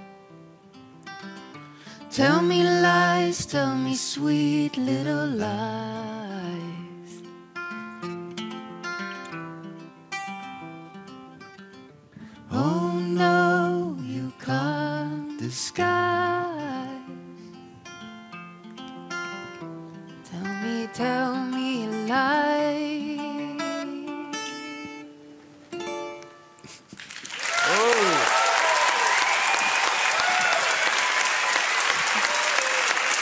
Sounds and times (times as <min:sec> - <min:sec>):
Music: 0:00.0 - 0:26.9
Applause: 0:27.0 - 0:33.2.